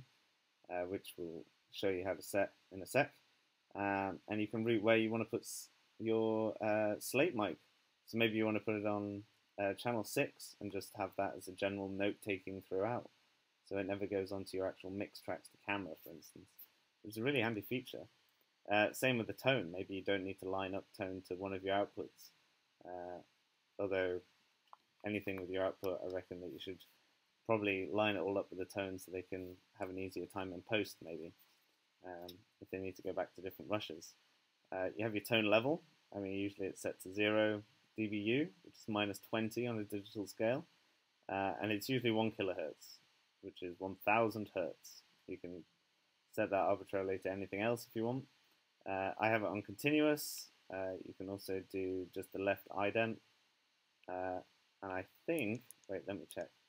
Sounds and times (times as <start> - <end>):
Speech: 0.7 - 3.1, 3.8 - 13.1, 13.7 - 16.5, 17.1 - 18.1, 18.7 - 22.3, 22.9 - 23.2, 23.8 - 24.2, 25.0 - 26.8, 27.5 - 31.3, 32.0 - 34.2, 34.8 - 40.7, 41.3 - 45.6, 46.4 - 48.3, 48.9 - 53.2, 54.1 - 56.5.